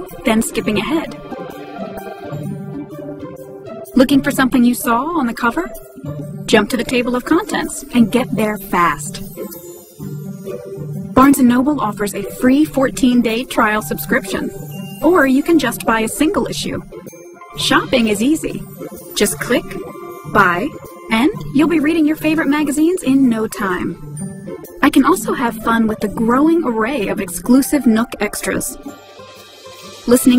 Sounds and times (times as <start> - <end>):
Speech: 0.0 - 1.2, 4.0 - 5.8, 6.5 - 9.2, 11.2 - 16.8, 17.6 - 18.6, 19.2 - 24.0, 24.8 - 28.8, 30.1 - 30.3
Music: 0.0 - 30.3.